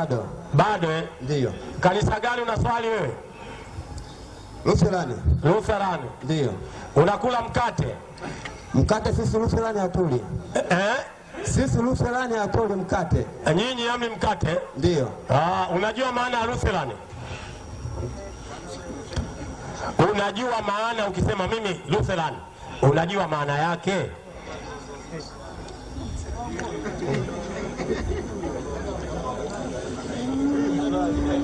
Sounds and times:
Speech: 0.0 - 3.2, 4.6 - 8.0, 18.0 - 27.8.

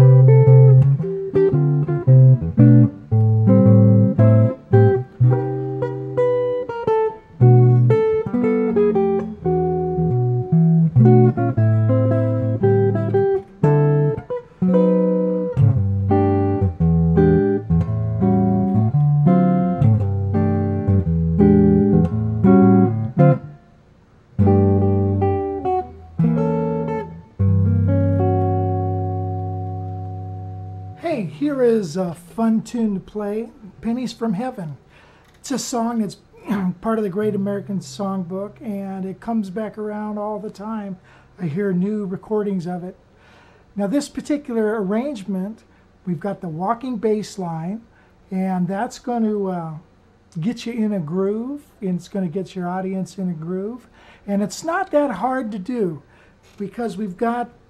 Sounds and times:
Strum: 0.0 - 23.7, 24.3 - 33.8, 35.4 - 38.6.

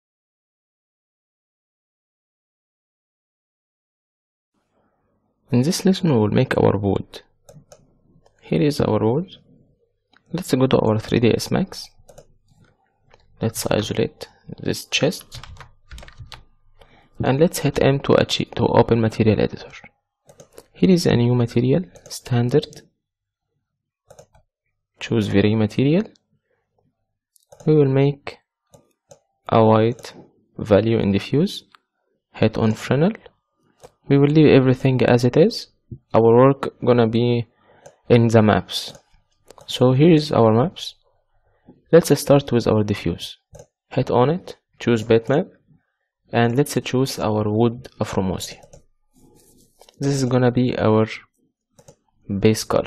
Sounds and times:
Speech: 5.5 - 7.3, 8.4 - 9.4, 10.3 - 12.0, 13.4 - 15.6, 17.2 - 19.9, 20.7 - 22.8, 25.0 - 26.2, 27.6 - 28.4, 29.5 - 31.7, 32.4 - 33.3, 34.1 - 37.5, 38.1 - 39.0, 39.6 - 41.0, 41.9 - 45.6, 46.3 - 48.7, 49.9 - 51.3, 52.3 - 52.8.

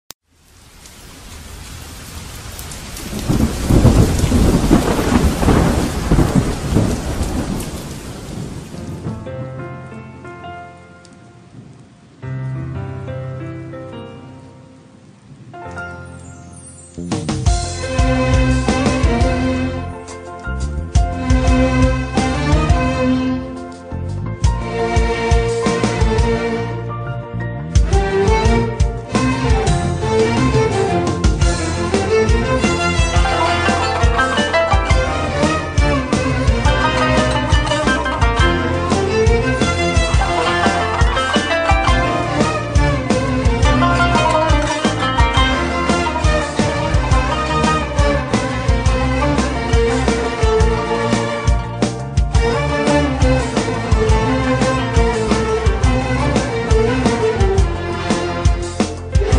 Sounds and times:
Rain: 0.2 - 26.8, 27.8 - 59.3
Thunderstorm: 1.2 - 10.1
Music: 3.2 - 7.6, 8.3 - 59.3.

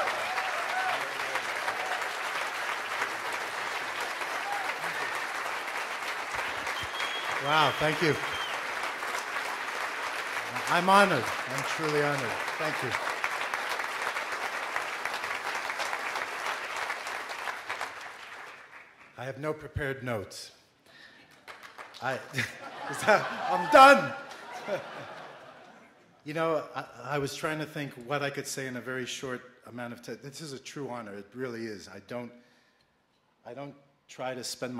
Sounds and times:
Male speech, man speaking: 7.4 - 8.2, 10.6 - 13.0, 19.2 - 20.6, 22.0 - 22.3, 22.9 - 24.2, 26.3 - 32.4, 33.5 - 34.7.

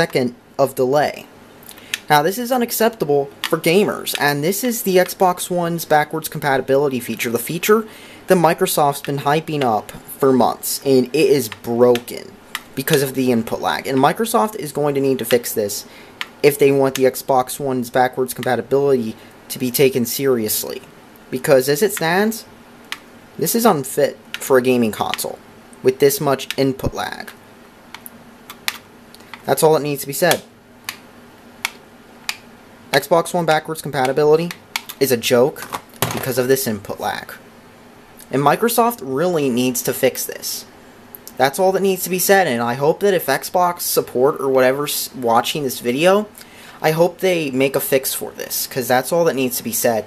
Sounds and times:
Speech: 0.0 - 1.3, 2.1 - 22.5, 23.4 - 27.4, 29.4 - 30.5, 32.9 - 37.4, 38.2 - 40.7, 41.3 - 50.0.

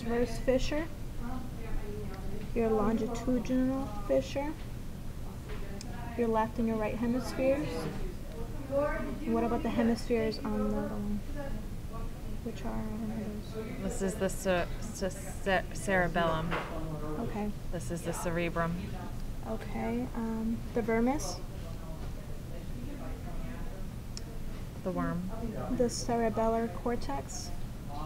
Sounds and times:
Speech: 0.0 - 4.6, 5.3 - 28.0.

